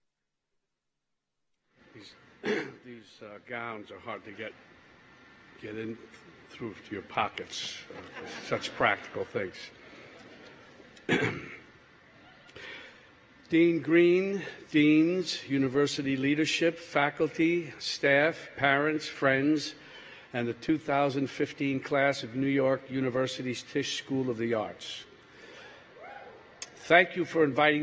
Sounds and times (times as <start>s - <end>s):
Narration, monologue: 1.6s - 26.0s, 26.6s - 27.8s
Male speech, man speaking: 2.8s - 4.6s, 5.6s - 9.8s, 13.5s - 19.8s, 20.4s - 25.1s, 26.7s - 27.8s.